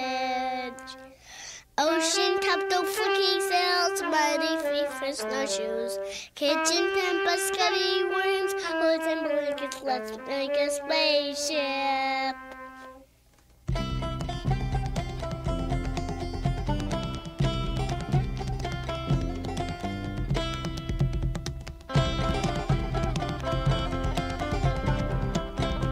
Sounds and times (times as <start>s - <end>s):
Music: 0.0s - 1.2s, 1.8s - 25.9s
Speech: 1.8s - 12.4s.